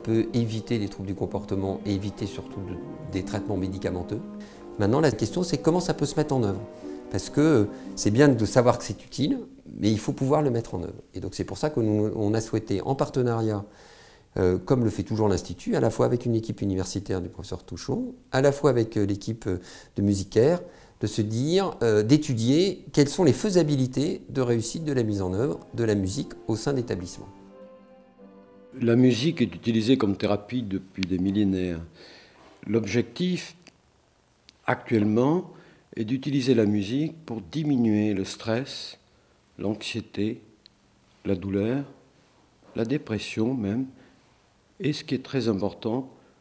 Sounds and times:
Speech: 0.0 - 4.2, 4.8 - 13.7, 14.4 - 27.3, 28.8 - 33.6, 34.6 - 39.0, 39.6 - 40.6, 41.2 - 42.0, 42.7 - 44.0, 44.8 - 46.2
Music: 0.0 - 10.6, 24.3 - 31.7.

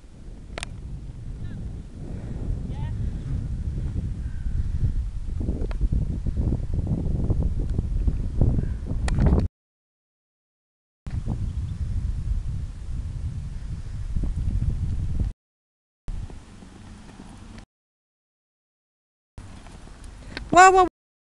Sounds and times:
Clip-clop: 16.2 - 17.6, 19.4 - 20.8.

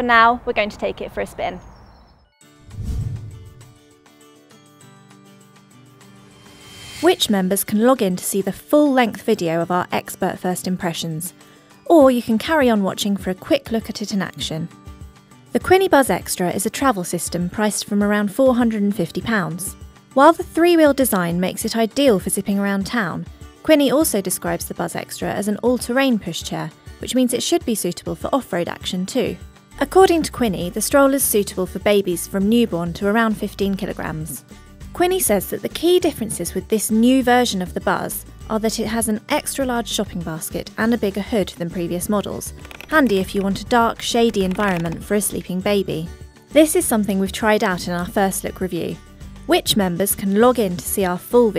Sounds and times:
Speech: 0.0 - 1.6, 7.0 - 11.3, 11.9 - 14.7, 15.6 - 34.4, 35.0 - 51.5
Music: 2.2 - 51.5.

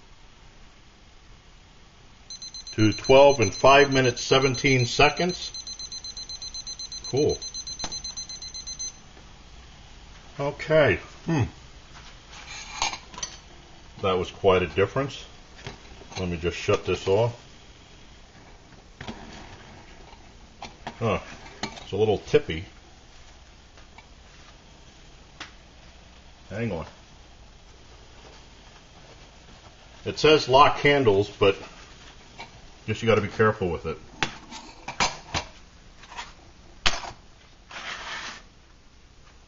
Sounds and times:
Boiling: 0.0 - 37.8
Speech: 2.8 - 5.5, 10.4 - 11.6, 14.0 - 15.3, 16.2 - 17.4, 21.0 - 21.3, 21.9 - 22.8, 26.5 - 27.0, 30.0 - 31.7, 32.9 - 34.0.

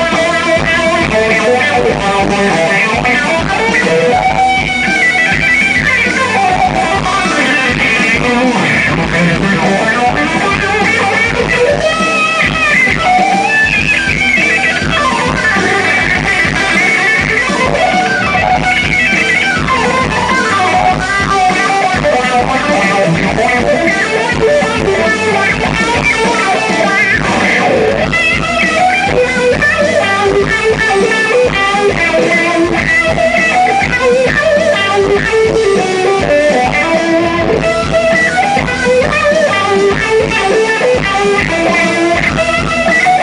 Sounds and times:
Music: 0.0 - 43.2.

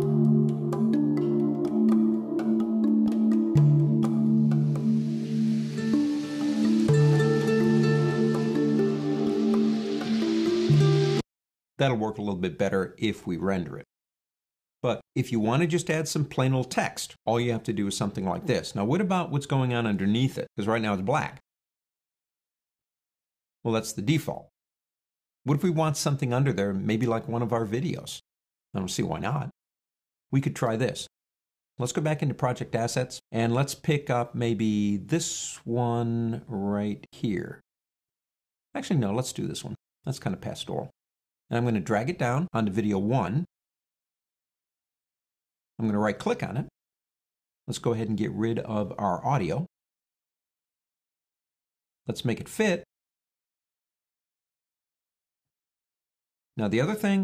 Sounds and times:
Speech: 11.8 - 13.9, 14.8 - 21.4, 23.7 - 24.5, 25.5 - 28.2, 28.8 - 29.6, 30.4 - 31.1, 31.8 - 37.6, 38.8 - 40.9, 41.5 - 43.5, 45.8 - 46.7, 47.7 - 49.7, 52.1 - 52.9, 56.6 - 57.2.

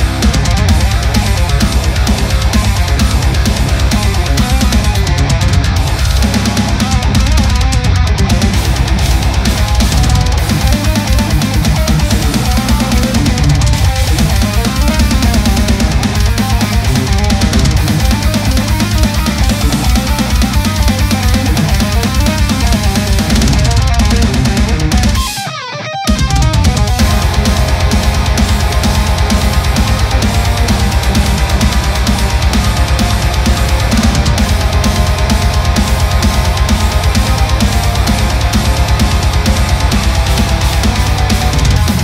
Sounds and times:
Electric guitar: 0.0 - 42.0
Strum: 0.0 - 42.0.

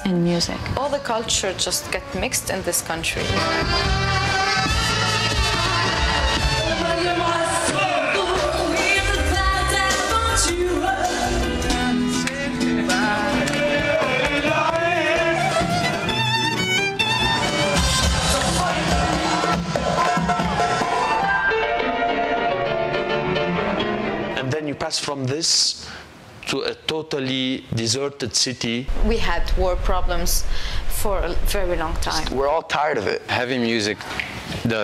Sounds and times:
Music: 0.0 - 24.8.

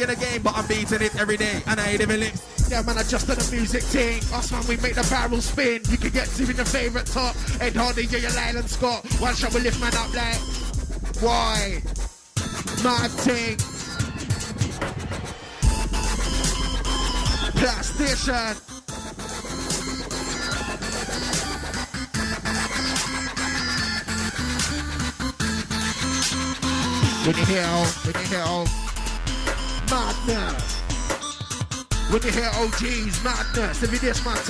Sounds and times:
Dubstep: 0.0 - 34.4.

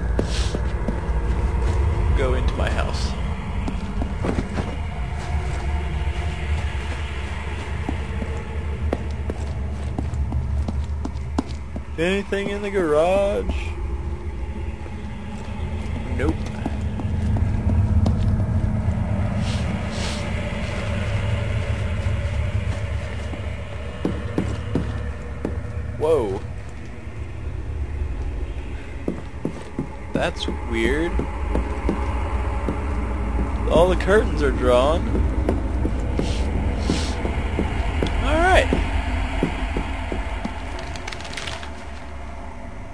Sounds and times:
Speech: 2.1 - 3.2, 12.0 - 13.8, 16.1 - 16.7, 26.0 - 26.5, 30.2 - 31.2, 33.6 - 35.1, 38.2 - 38.8.

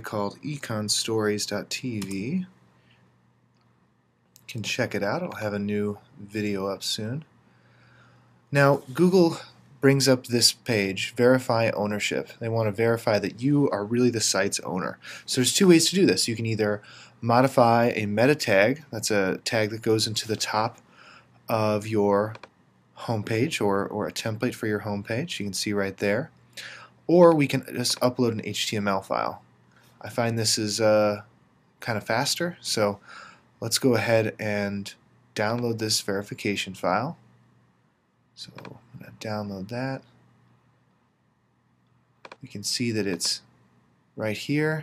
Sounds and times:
Speech: 0.0 - 2.6, 4.4 - 7.3, 8.5 - 20.8, 21.5 - 22.4, 23.0 - 26.3, 27.1 - 29.4, 30.0 - 33.0, 33.6 - 37.2, 38.4 - 40.2, 42.4 - 43.5, 44.2 - 44.8.

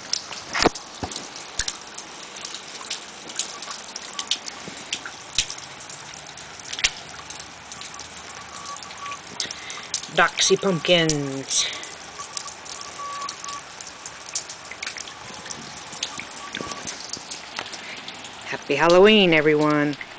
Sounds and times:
Speech: 10.1 - 11.8, 18.5 - 20.0.

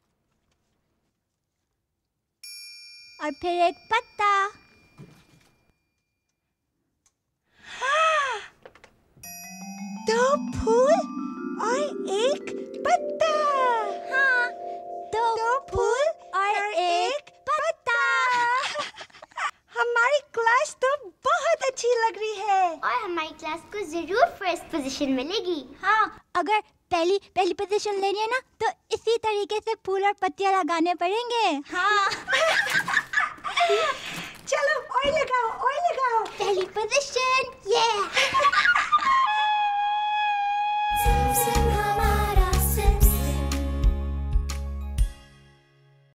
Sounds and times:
Child speech, kid speaking: 3.2 - 4.6, 11.6 - 18.7, 19.7 - 32.2, 34.5 - 38.1
Flute: 39.2 - 42.6.

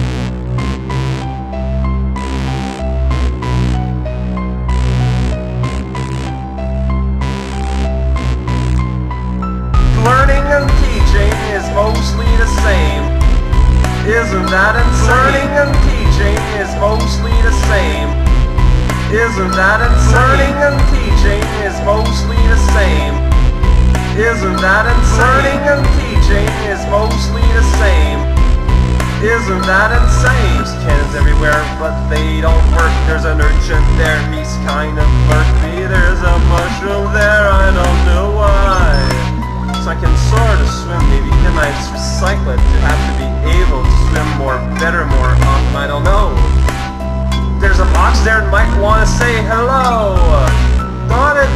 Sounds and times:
Music: 0.0 - 51.5
Speech: 10.0 - 13.2, 14.0 - 18.2, 19.1 - 23.2, 24.2 - 28.3, 29.2 - 46.5, 47.6 - 51.5.

